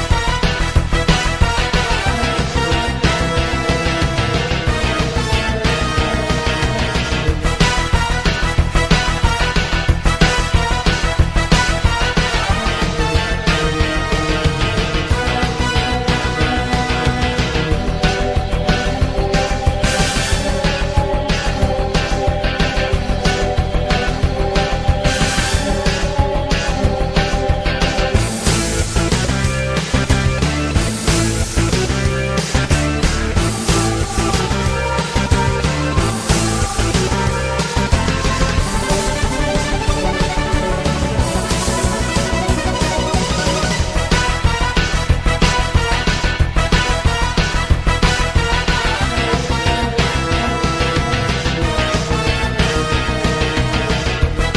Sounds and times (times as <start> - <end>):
Theme music: 0.0 - 54.5.